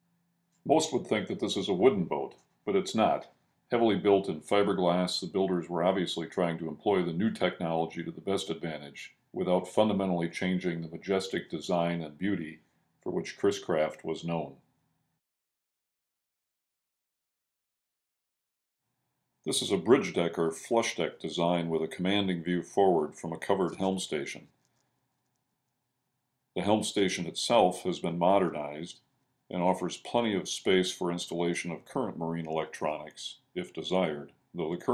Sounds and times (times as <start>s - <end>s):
Speech: 0.7s - 14.6s, 19.5s - 24.5s, 26.6s - 34.9s.